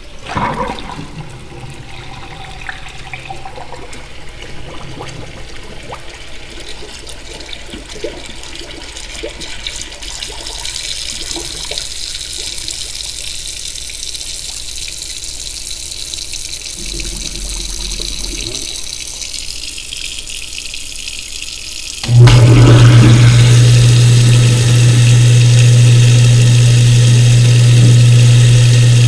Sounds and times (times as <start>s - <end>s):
Liquid: 0.0s - 29.0s
Sink (filling or washing): 0.0s - 29.0s
Water: 0.0s - 29.0s.